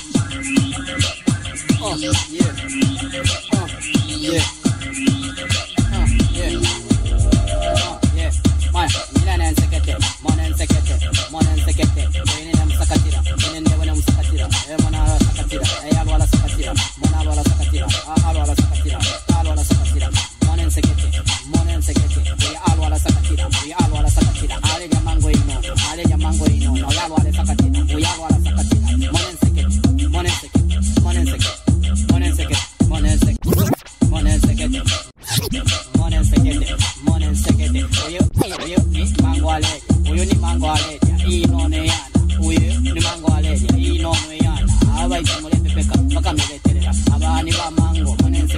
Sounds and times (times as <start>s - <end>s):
Music: 0.0s - 48.5s.